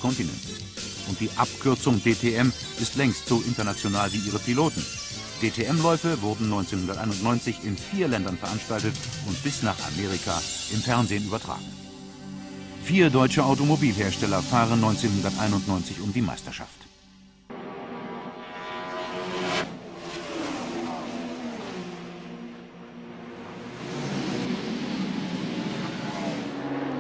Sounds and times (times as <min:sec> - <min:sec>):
Speech: 0:00.0 - 0:11.7, 0:12.8 - 0:16.9
Music: 0:00.0 - 0:19.0.